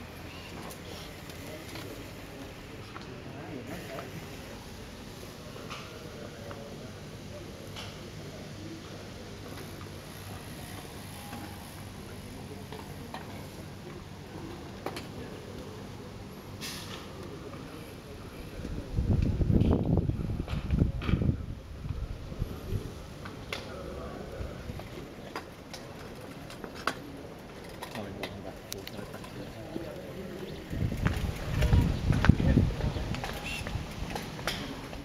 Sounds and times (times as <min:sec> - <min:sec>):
Speech: 0:00.2 - 0:04.7, 0:05.3 - 0:19.4, 0:22.3 - 0:26.4, 0:27.9 - 0:33.8.